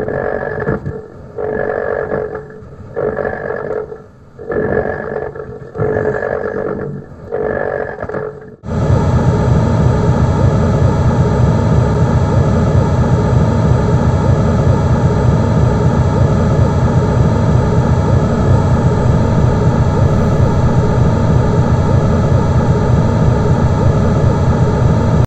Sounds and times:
Sound effect: 0.0s - 25.2s.

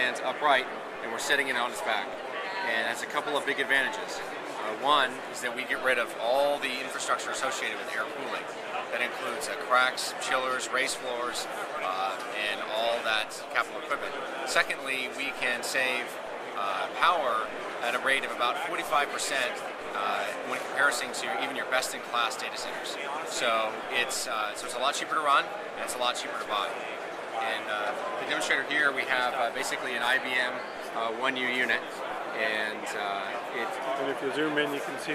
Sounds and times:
Speech: 0.0s - 35.1s.

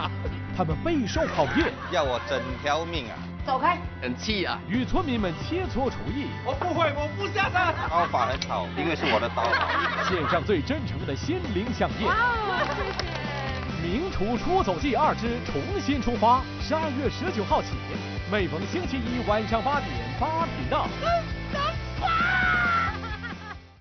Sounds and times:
Music: 0.0s - 23.8s
Snicker: 1.2s - 2.6s, 9.0s - 10.4s, 22.7s - 23.7s.

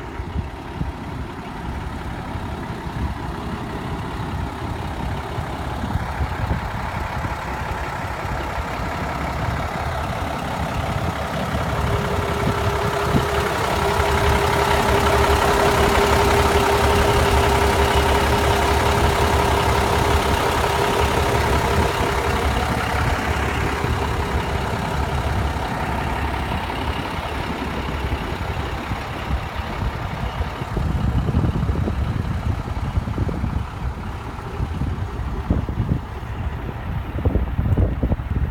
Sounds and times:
Bus: 0.0s - 38.5s.

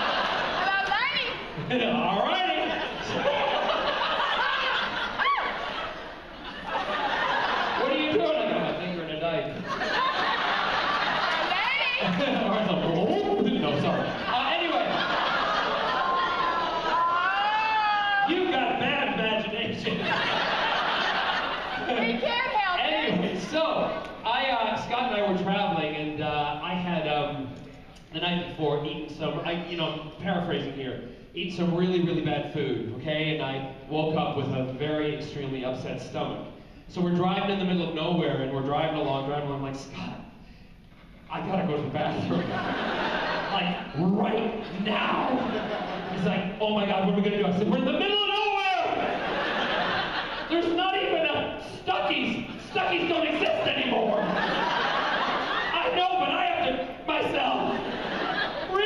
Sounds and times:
Inside, large room or hall: 0.0s - 58.8s.

